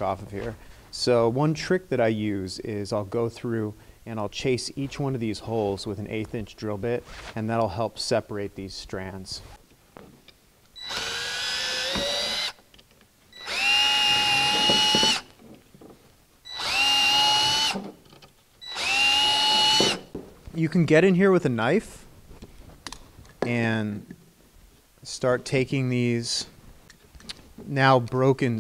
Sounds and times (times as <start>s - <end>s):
Speech: 0.0s - 9.5s, 20.6s - 22.0s, 23.4s - 24.1s, 25.0s - 26.6s, 27.7s - 28.6s.